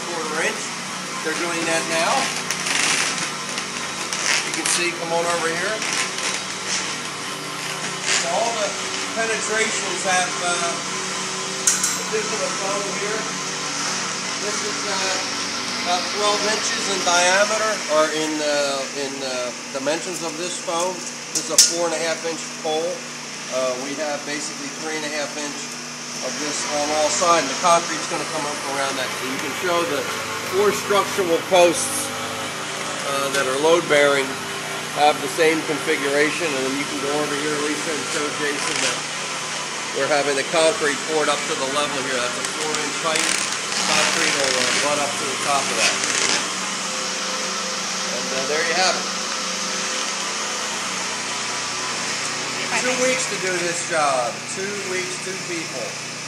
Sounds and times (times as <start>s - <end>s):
Splinter: 1.4s - 9.1s, 38.5s - 39.1s, 41.4s - 46.5s.